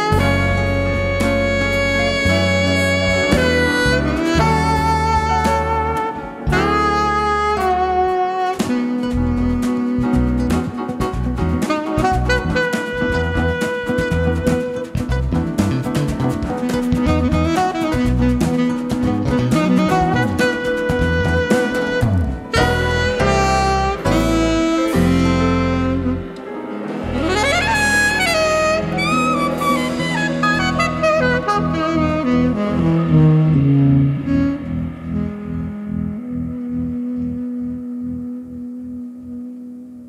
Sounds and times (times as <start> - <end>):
Guitar: 0.0 - 40.0
Piano: 0.0 - 40.0
Saxophone: 0.0 - 40.0.